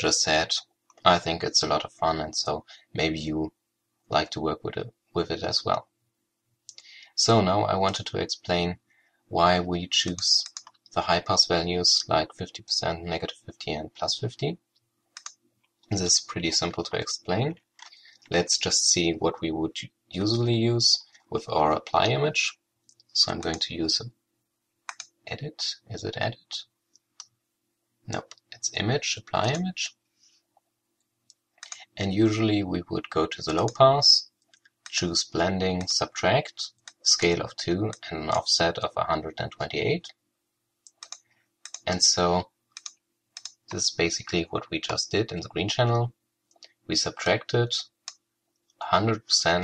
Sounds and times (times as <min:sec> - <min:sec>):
Clicking: 0:10.1 - 0:10.9, 0:14.8 - 0:15.8, 0:24.9 - 0:25.2, 0:31.0 - 0:31.8, 0:40.8 - 0:41.8, 0:42.8 - 0:43.6, 0:48.0 - 0:48.8.